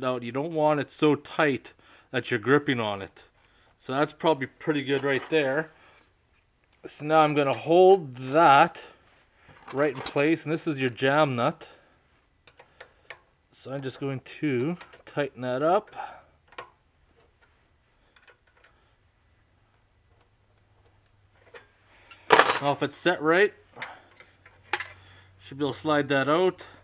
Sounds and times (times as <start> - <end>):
Speech: 0.0 - 5.7, 6.9 - 8.9, 9.7 - 11.7, 13.6 - 16.0, 22.6 - 23.6, 25.4 - 26.8
Inside, small room: 0.0 - 26.8.